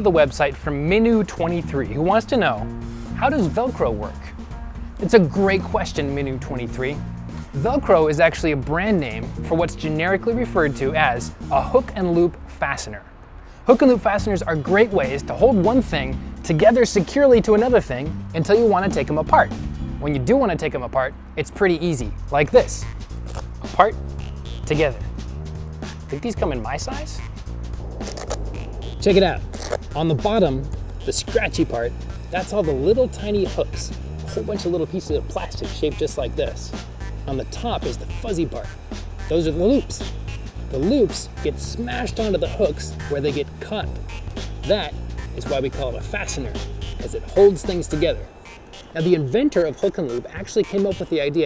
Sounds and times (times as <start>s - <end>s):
Speech: 0.0s - 4.4s, 5.0s - 7.0s, 7.6s - 13.1s, 13.7s - 22.9s, 23.6s - 24.0s, 24.7s - 25.1s, 26.1s - 27.2s, 29.0s - 29.4s, 30.0s - 38.7s, 39.3s - 40.1s, 40.7s - 44.0s, 44.6s - 48.3s, 49.0s - 51.4s
Music: 0.0s - 51.4s.